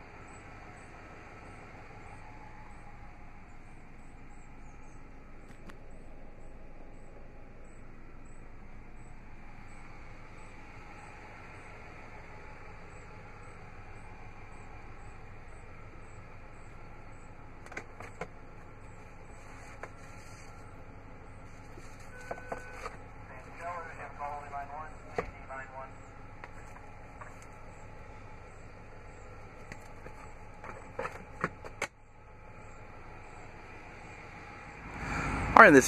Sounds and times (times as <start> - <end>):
Speech: 23.3 - 26.0, 35.6 - 35.8.